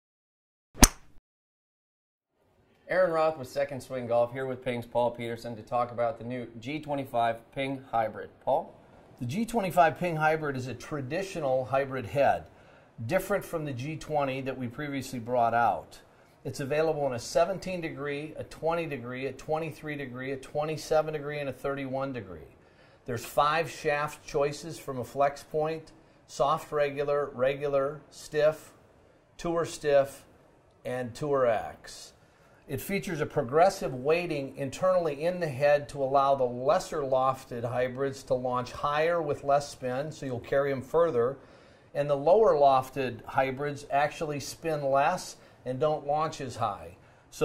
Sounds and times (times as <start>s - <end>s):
Speech: 2.8s - 28.8s, 29.4s - 41.4s, 42.0s - 47.4s.